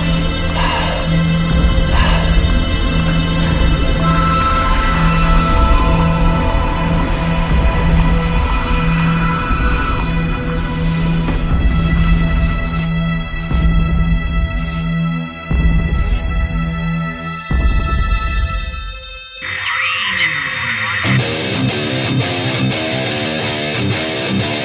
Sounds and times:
Music: 0.0 - 24.6.

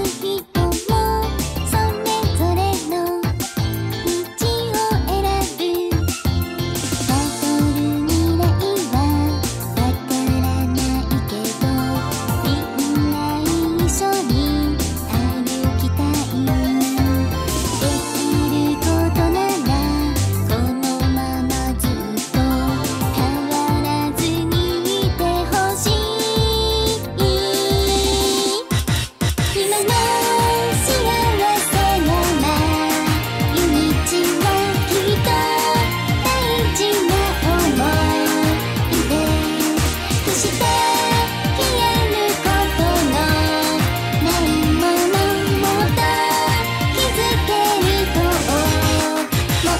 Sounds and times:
Music: 0.0 - 49.7.

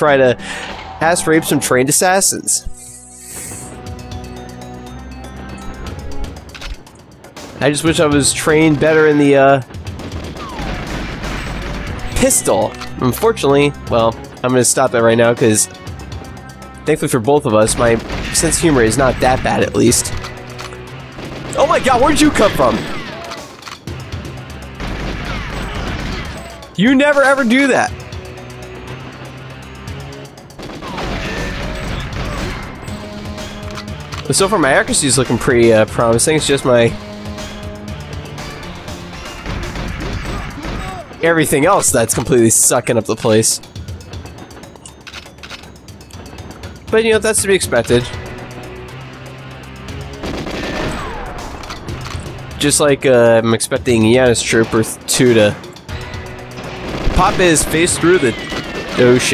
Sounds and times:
Music: 0.0 - 59.3
Speech: 1.0 - 2.8, 7.6 - 9.6, 12.2 - 15.7, 16.9 - 20.1, 21.6 - 22.8, 26.8 - 27.9, 34.3 - 37.0, 41.2 - 43.6, 46.9 - 48.2, 52.6 - 55.6, 57.2 - 58.4, 59.0 - 59.3.

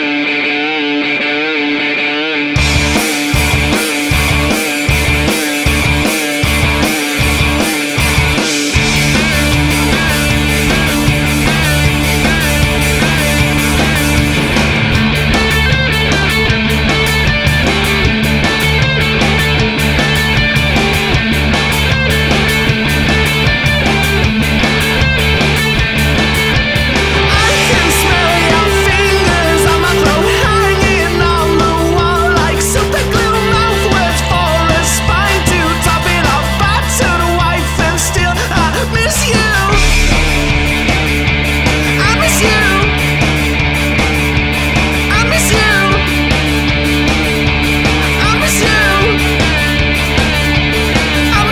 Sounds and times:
Heavy metal: 0.0 - 51.5
Punk rock: 0.0 - 51.5
Rock and roll: 0.0 - 51.5
Dance music: 27.1 - 43.1, 45.1 - 46.1, 47.7 - 49.7.

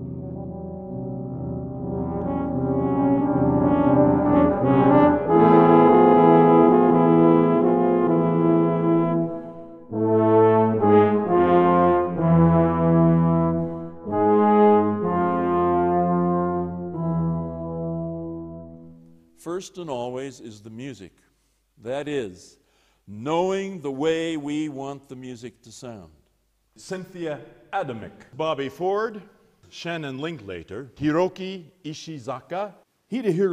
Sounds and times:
Trombone: 0.0 - 19.2.

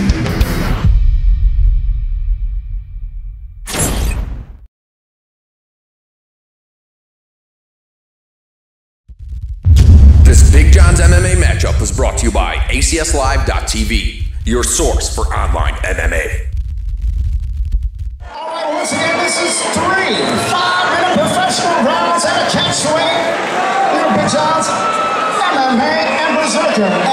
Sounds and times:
Silence: 9.2 - 18.2
Speech: 10.3 - 16.4, 18.3 - 23.3.

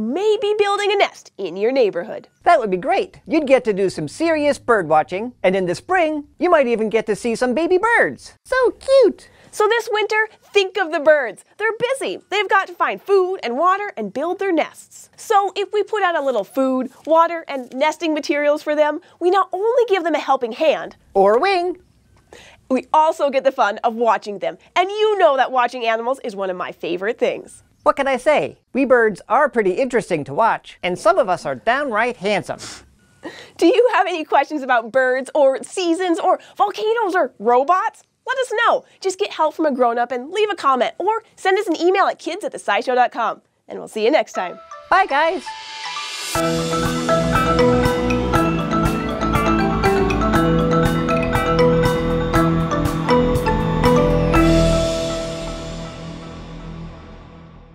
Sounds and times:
Music: 44.4 - 57.7.

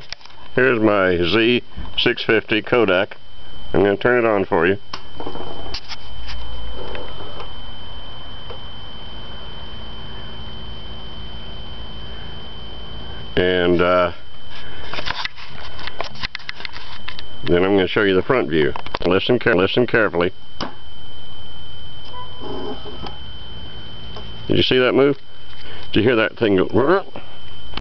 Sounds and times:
Speech: 0.6 - 4.8, 13.4 - 14.2, 17.5 - 20.4, 24.5 - 25.2, 25.9 - 27.2.

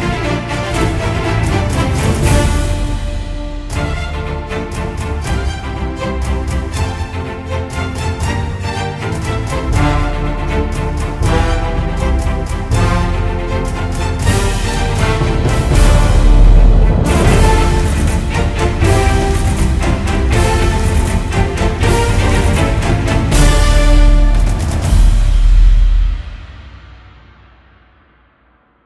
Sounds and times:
Music: 0.0 - 28.8.

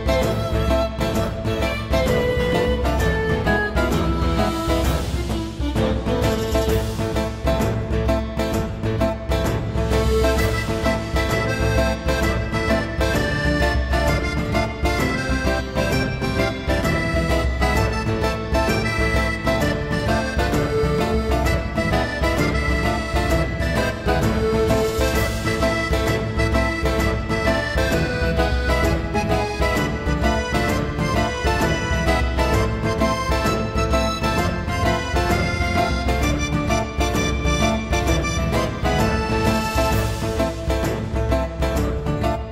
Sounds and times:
Accordion: 0.0 - 42.5.

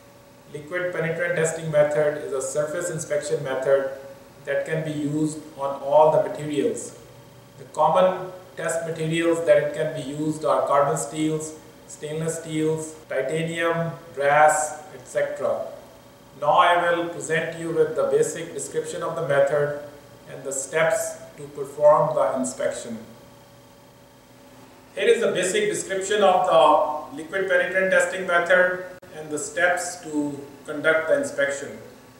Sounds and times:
Speech: 0.5 - 7.0, 7.6 - 15.8, 16.4 - 23.2, 25.0 - 32.0.

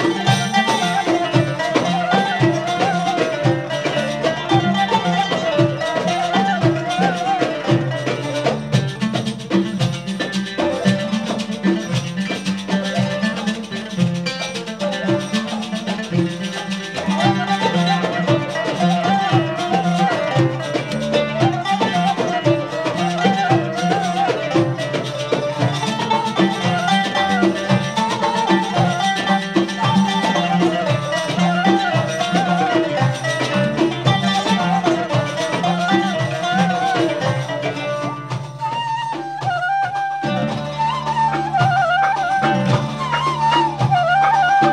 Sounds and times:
Music: 0.0 - 44.7.

